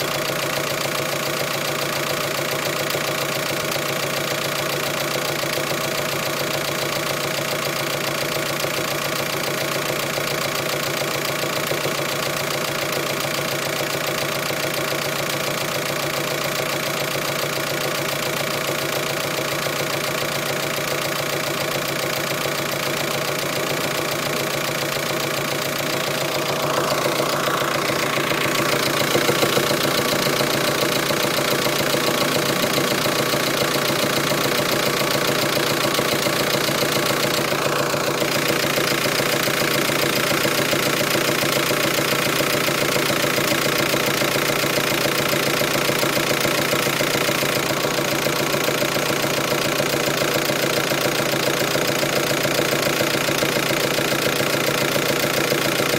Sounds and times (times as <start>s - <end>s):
Medium engine (mid frequency): 0.0s - 55.9s.